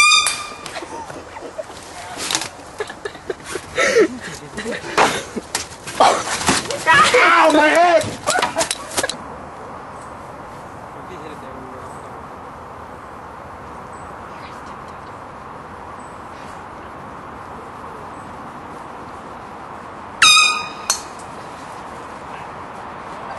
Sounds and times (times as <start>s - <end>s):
Outside, rural or natural: 0.0s - 23.3s
Speech: 11.0s - 12.2s.